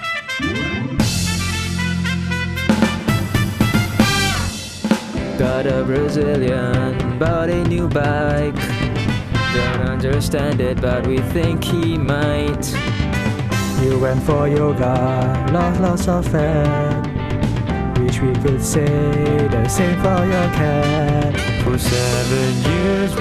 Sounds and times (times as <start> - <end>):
Music: 0.0 - 23.2.